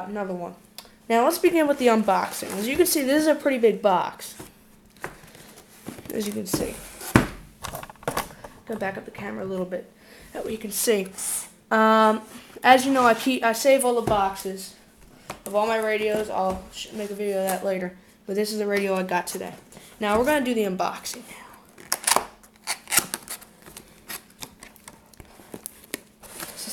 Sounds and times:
Speech: 0.0 - 4.4, 6.1 - 6.8, 8.7 - 14.8, 15.5 - 21.6.

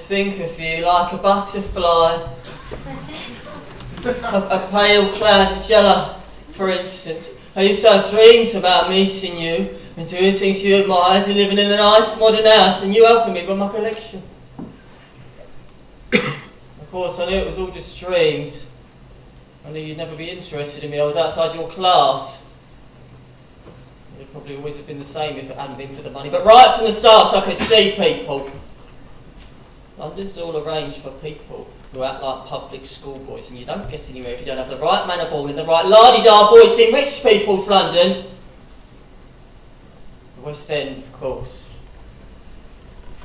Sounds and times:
Narration, monologue: 0.0 - 43.2.

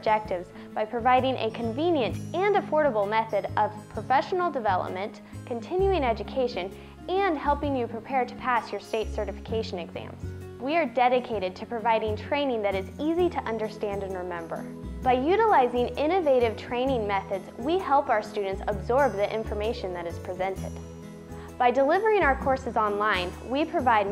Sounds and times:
Speech: 0.0 - 20.7, 21.6 - 24.1
Music: 0.0 - 24.1.

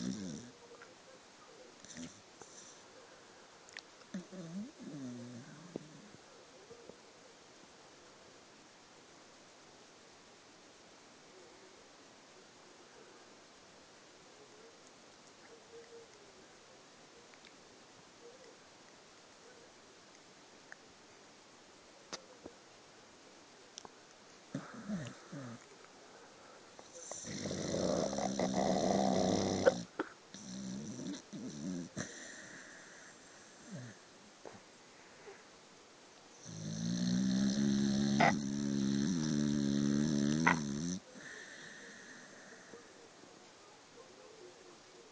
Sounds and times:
Snoring: 0.0 - 0.6, 1.8 - 2.8, 4.1 - 6.2, 24.5 - 25.6, 26.8 - 34.0, 36.4 - 42.8.

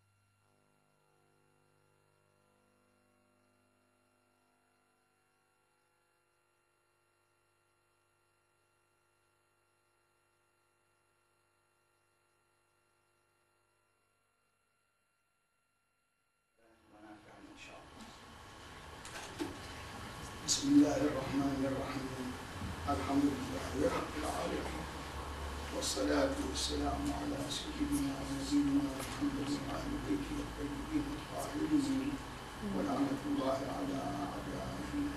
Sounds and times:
Male speech, man speaking: 16.6 - 18.2, 20.5 - 25.0, 25.7 - 35.1.

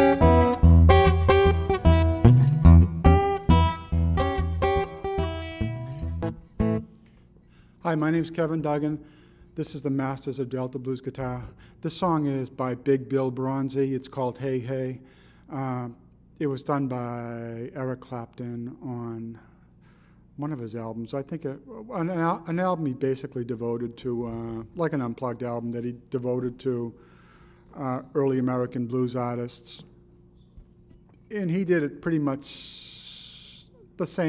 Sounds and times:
Acoustic guitar: 0.0 - 7.2
Strum: 0.0 - 7.2
Speech: 7.8 - 9.0, 9.6 - 19.5, 20.4 - 27.0, 27.7 - 30.0, 31.3 - 34.2.

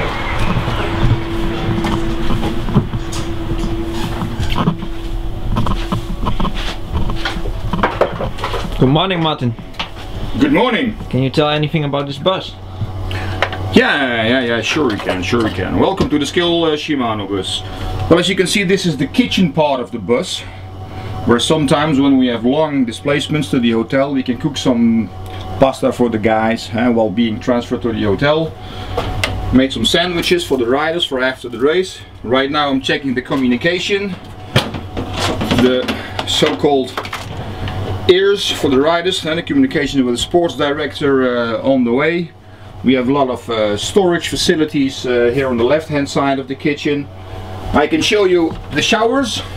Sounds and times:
Speech: 8.8 - 9.6, 10.4 - 12.6, 13.7 - 20.6, 21.3 - 28.6, 29.5 - 34.2, 35.5 - 37.1, 38.1 - 47.1, 47.7 - 49.5.

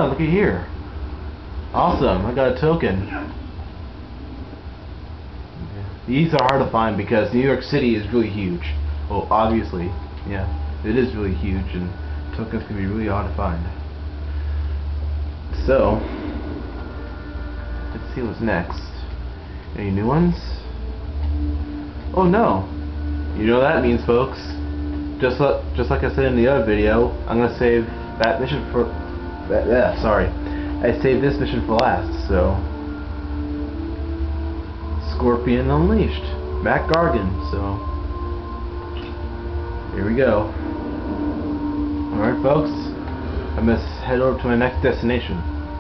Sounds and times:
Music: 0.0 - 45.8
Speech: 1.8 - 3.4, 5.6 - 13.8, 15.5 - 16.0, 18.0 - 19.1, 19.8 - 20.6, 22.2 - 22.7, 23.4 - 24.6, 25.2 - 28.9, 29.5 - 32.6, 35.0 - 37.8, 39.9 - 40.5, 42.1 - 42.9, 43.6 - 45.4.

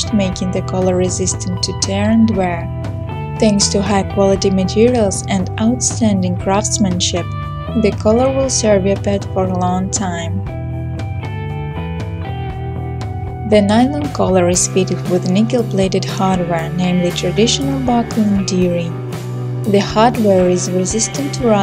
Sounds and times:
Speech: 0.0 - 2.7, 3.4 - 10.4, 13.5 - 19.0, 19.7 - 21.6
Music: 0.0 - 21.6.

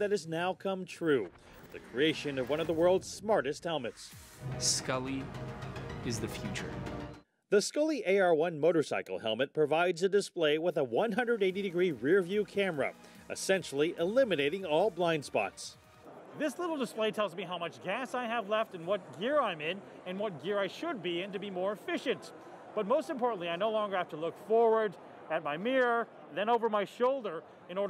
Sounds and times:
Speech: 0.0 - 5.3, 6.0 - 6.8, 7.5 - 15.7, 16.4 - 27.8.

